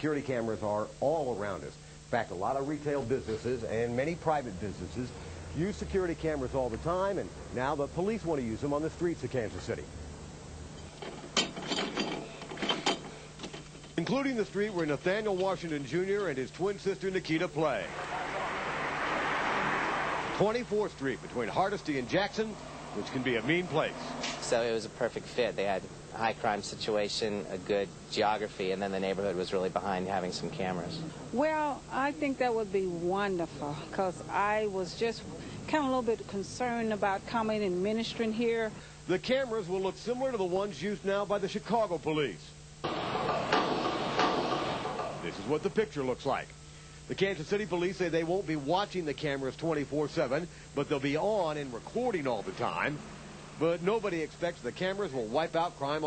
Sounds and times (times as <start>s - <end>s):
Speech: 0.0s - 9.9s, 14.0s - 17.9s, 20.4s - 42.6s, 45.2s - 46.5s, 47.1s - 53.0s, 53.6s - 56.0s.